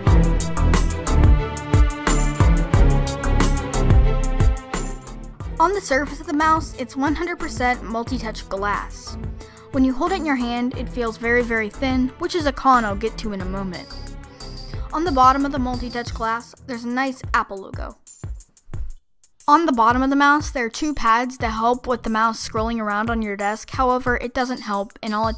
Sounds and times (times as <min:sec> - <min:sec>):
Music: 0:00.0 - 0:25.3
Speech: 0:05.6 - 0:09.2, 0:09.8 - 0:14.1, 0:15.0 - 0:18.0, 0:19.5 - 0:25.3.